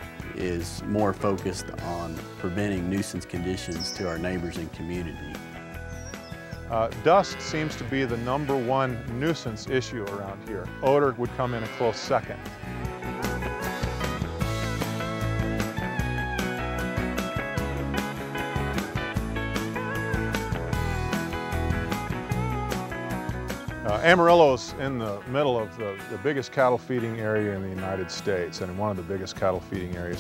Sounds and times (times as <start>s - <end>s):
Moo: 7.0s - 8.8s, 11.3s - 14.2s.